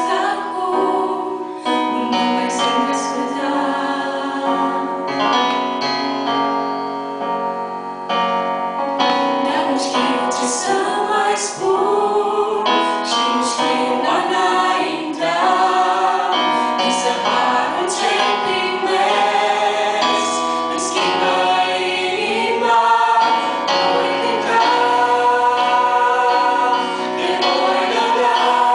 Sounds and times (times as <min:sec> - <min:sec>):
Choir: 0:00.0 - 0:05.4, 0:09.2 - 0:28.7
Gospel music: 0:00.0 - 0:28.7.